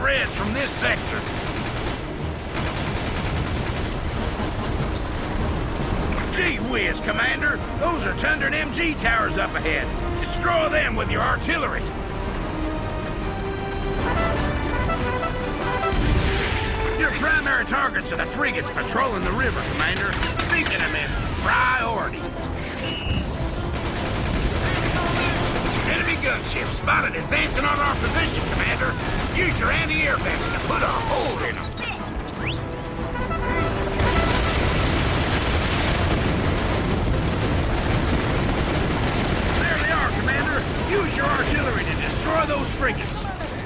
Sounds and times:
Music: 0.0s - 43.6s
Speech: 17.0s - 22.2s, 24.9s - 32.0s, 39.6s - 43.6s.

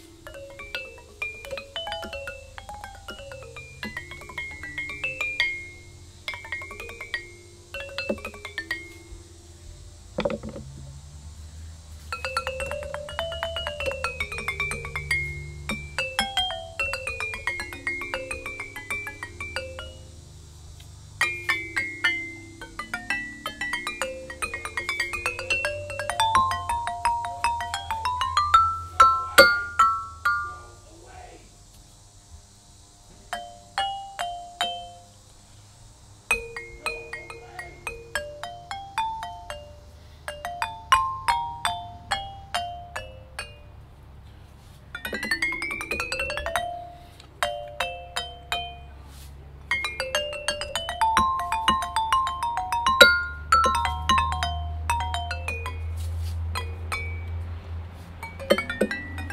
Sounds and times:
Glockenspiel: 0.0s - 10.8s, 12.0s - 31.2s, 33.3s - 35.2s, 36.3s - 44.0s, 44.8s - 59.3s
Marimba, xylophone: 0.0s - 10.8s, 11.9s - 31.0s, 33.3s - 35.2s, 36.3s - 59.3s.

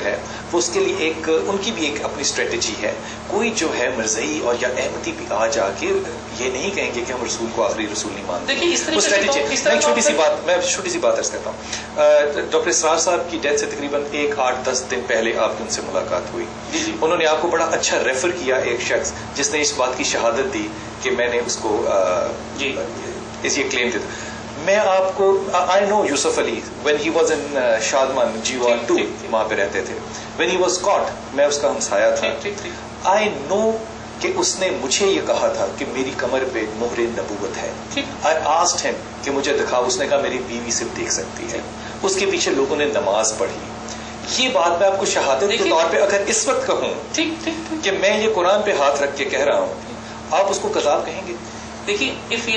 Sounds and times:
Speech: 0.0s - 43.7s, 44.3s - 52.5s.

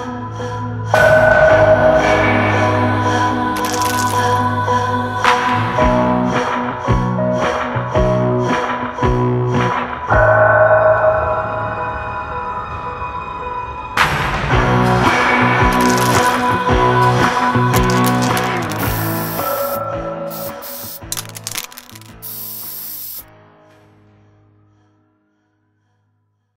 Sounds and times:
Music: 0.0s - 26.5s
Spray: 3.6s - 4.3s, 17.8s - 23.3s.

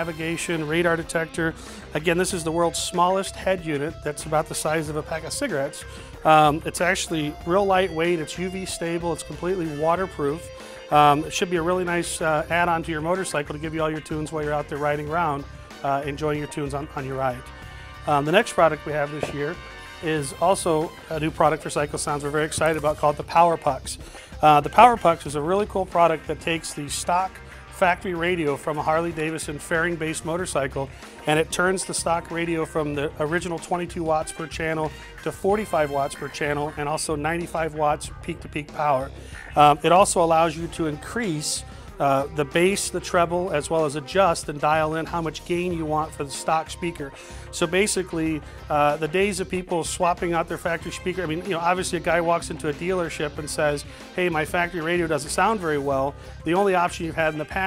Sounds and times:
Music: 0.0s - 57.6s
Speech: 0.0s - 57.6s.

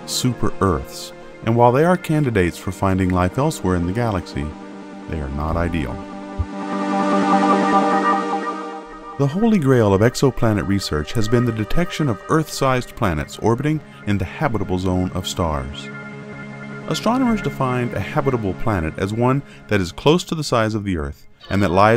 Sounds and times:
Speech: 0.0s - 6.0s, 9.2s - 15.9s, 16.9s - 21.9s
Music: 0.0s - 21.9s.

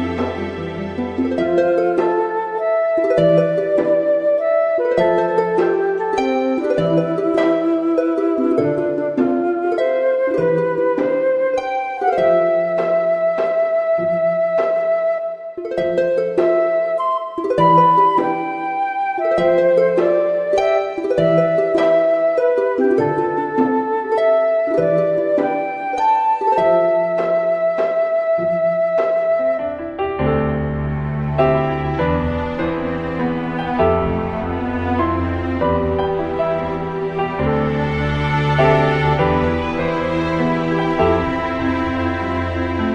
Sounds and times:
Harp: 0.0s - 42.9s.

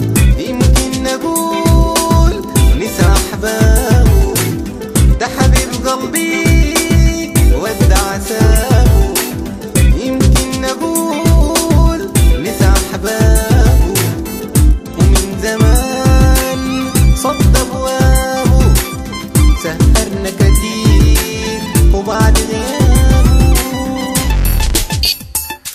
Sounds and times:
Music: 0.0s - 25.7s.

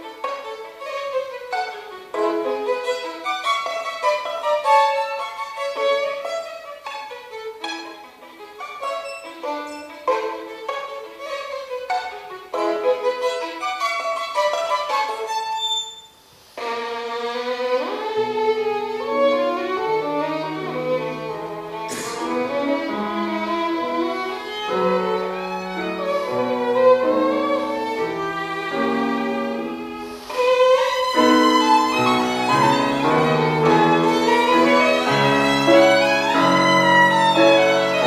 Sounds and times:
Violin, fiddle: 0.0s - 38.0s.

